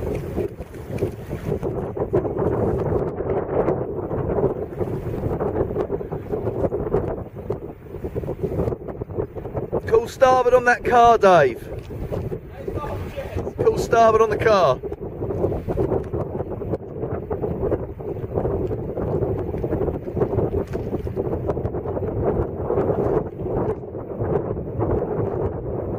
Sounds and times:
Wind noise (microphone): 0:00.0 - 0:25.9.

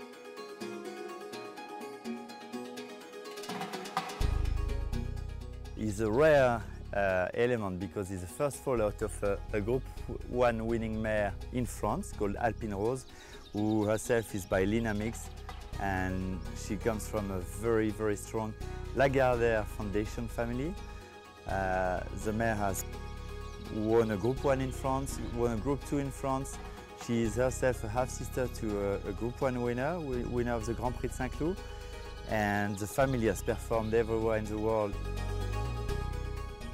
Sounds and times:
Music: 0:00.0 - 0:36.7
Speech: 0:05.8 - 0:20.8, 0:21.5 - 0:22.9, 0:23.7 - 0:31.6, 0:32.3 - 0:35.0.

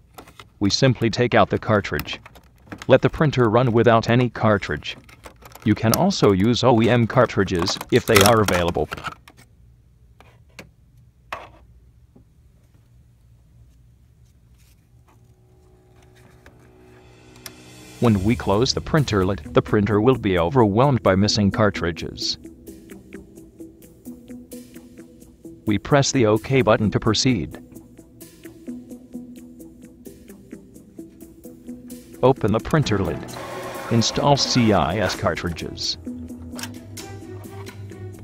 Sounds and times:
Speech: 0:00.6 - 0:05.0, 0:05.6 - 0:09.0, 0:18.0 - 0:22.4, 0:25.7 - 0:27.6, 0:32.2 - 0:33.3, 0:33.9 - 0:36.0.

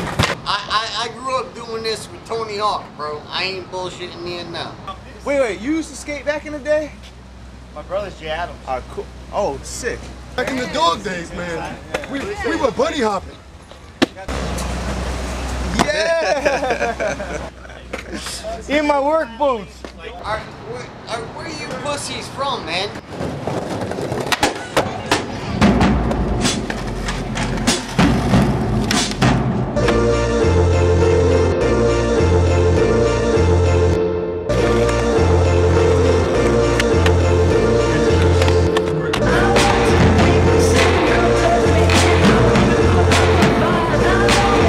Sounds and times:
Music: 0:25.6 - 0:44.6.

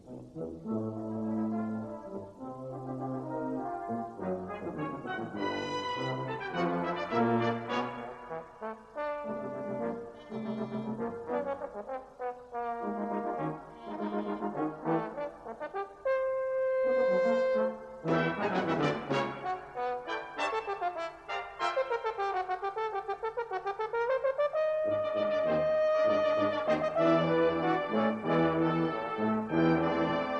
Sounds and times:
French horn: 0:00.0 - 0:30.4.

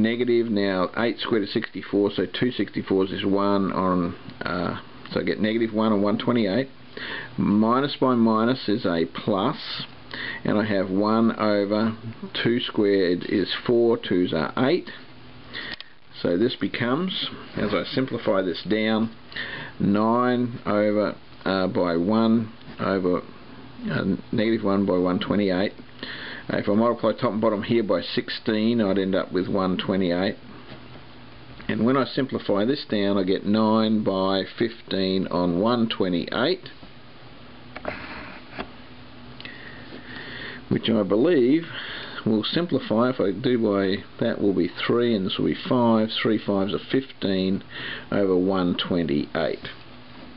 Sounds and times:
Speech: 0:00.0 - 0:06.8, 0:07.4 - 0:15.1, 0:16.1 - 0:19.2, 0:19.8 - 0:25.8, 0:26.5 - 0:30.4, 0:31.7 - 0:36.8, 0:40.7 - 0:49.8.

